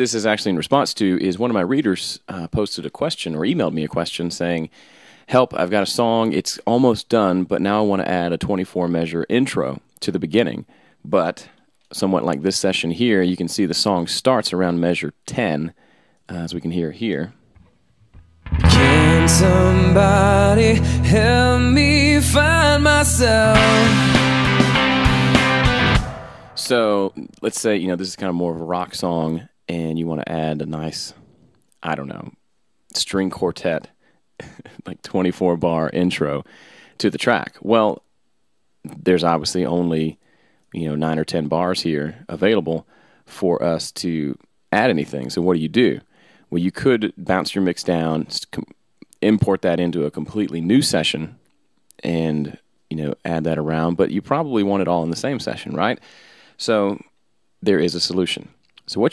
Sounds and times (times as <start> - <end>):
Speech: 0.0 - 4.7, 5.3 - 17.4, 26.6 - 31.2, 31.8 - 38.1, 38.8 - 56.0, 56.6 - 59.1
Music: 18.2 - 26.7.